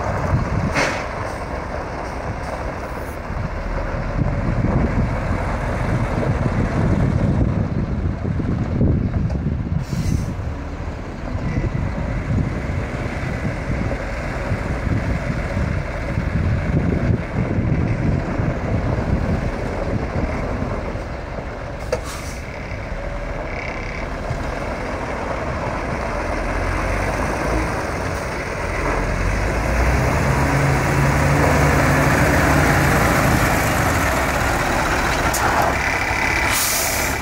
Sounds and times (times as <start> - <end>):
Truck: 0.0 - 37.2.